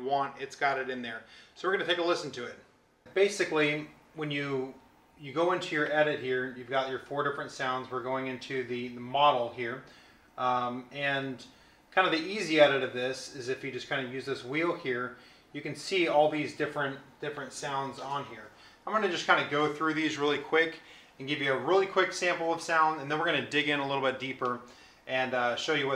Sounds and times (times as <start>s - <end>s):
Speech: 0.0s - 25.9s.